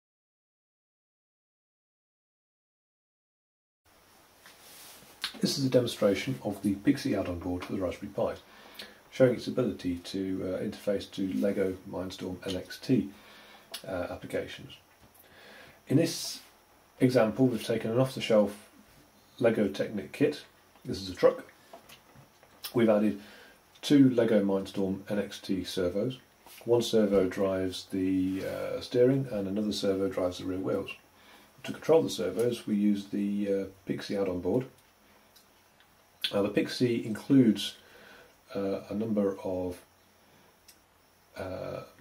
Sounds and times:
Speech: 0:05.2 - 0:08.5, 0:09.1 - 0:13.2, 0:13.8 - 0:14.8, 0:15.9 - 0:18.8, 0:19.4 - 0:21.5, 0:22.7 - 0:23.2, 0:23.8 - 0:31.0, 0:31.6 - 0:34.8, 0:36.3 - 0:37.8, 0:38.5 - 0:39.9, 0:41.4 - 0:42.0.

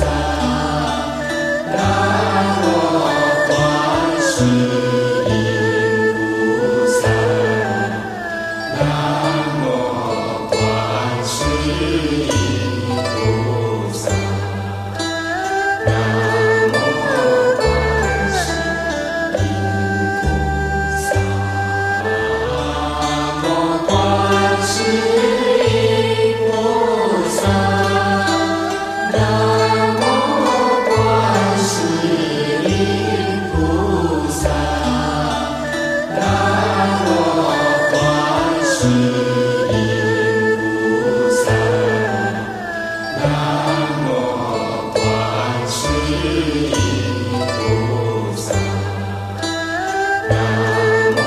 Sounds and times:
Mantra: 0:00.0 - 0:14.6, 0:15.9 - 0:21.4, 0:22.4 - 0:49.0.

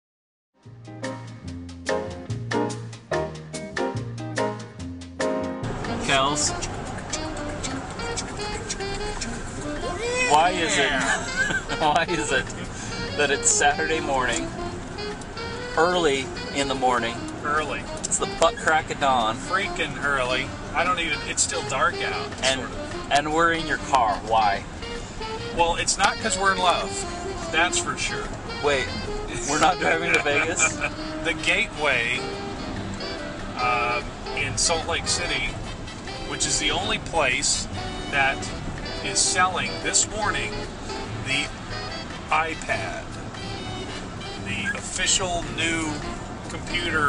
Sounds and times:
Music: 0:00.6 - 0:47.0
Speech: 0:06.0 - 0:06.7, 0:09.8 - 0:14.4, 0:15.8 - 0:24.6, 0:25.6 - 0:32.2, 0:33.6 - 0:35.6, 0:36.3 - 0:38.5, 0:39.1 - 0:40.6, 0:41.3 - 0:41.5, 0:42.3 - 0:43.0, 0:44.4 - 0:47.0.

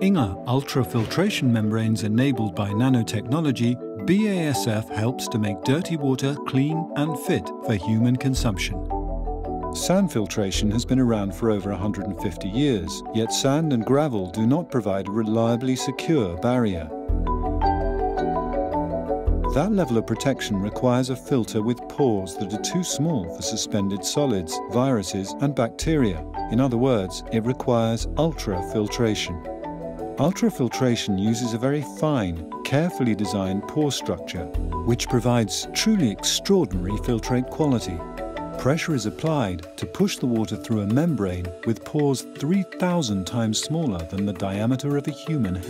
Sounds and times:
Speech: 0:00.0 - 0:08.8, 0:09.8 - 0:17.0, 0:19.5 - 0:29.4, 0:30.2 - 0:38.0, 0:38.6 - 0:45.7
Music: 0:00.0 - 0:45.7.

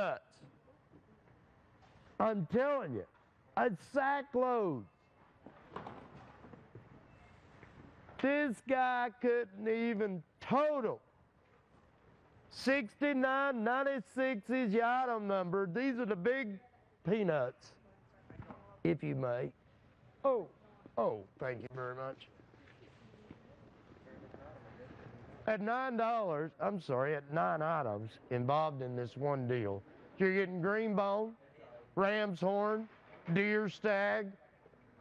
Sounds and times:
Speech: 0:00.0 - 0:00.4, 0:02.2 - 0:04.9, 0:08.2 - 0:11.0, 0:12.5 - 0:19.6, 0:20.2 - 0:22.3, 0:24.1 - 0:34.4.

